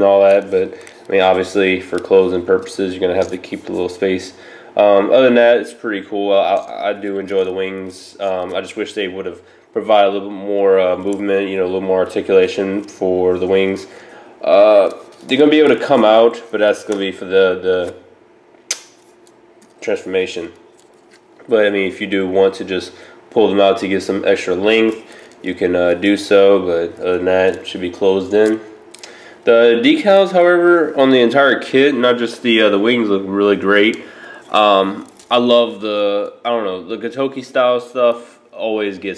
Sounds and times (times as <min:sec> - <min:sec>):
Speech: 0:00.0 - 0:18.0, 0:19.8 - 0:20.6, 0:21.4 - 0:28.7, 0:29.4 - 0:39.1
Inside, small room: 0:00.0 - 0:39.1.